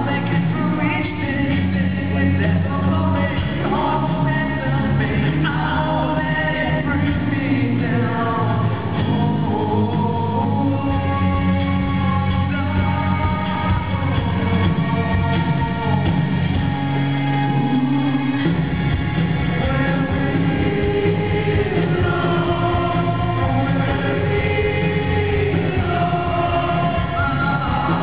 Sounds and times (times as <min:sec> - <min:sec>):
Music: 0:00.0 - 0:28.0.